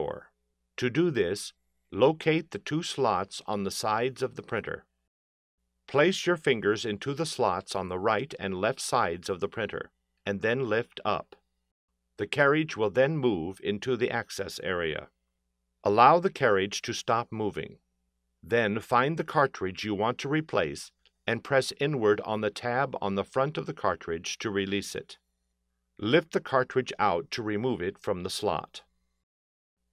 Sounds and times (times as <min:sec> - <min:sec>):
Speech: 0:00.0 - 0:04.9, 0:05.9 - 0:11.4, 0:12.2 - 0:15.2, 0:15.9 - 0:17.8, 0:18.5 - 0:25.2, 0:26.0 - 0:28.9.